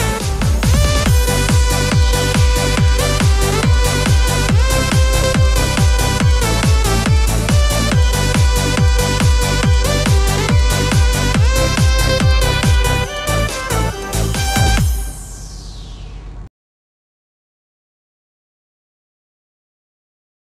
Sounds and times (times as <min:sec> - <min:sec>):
Music: 0:00.0 - 0:16.5.